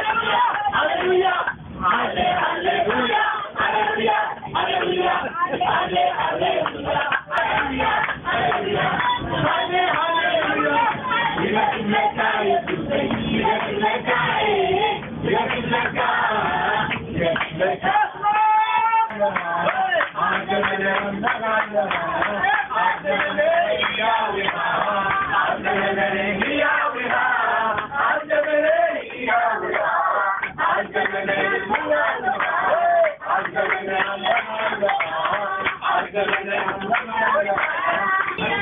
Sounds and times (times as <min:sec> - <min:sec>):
Bus: 0:00.0 - 0:38.6.